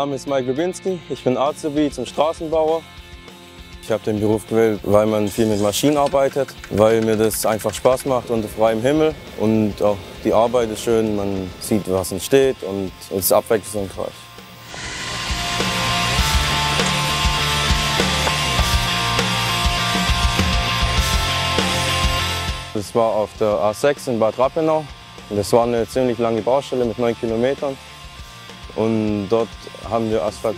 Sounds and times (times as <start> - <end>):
Speech: 0.0 - 2.8, 3.8 - 14.2, 22.8 - 27.8, 28.7 - 30.5
Music: 0.0 - 30.5.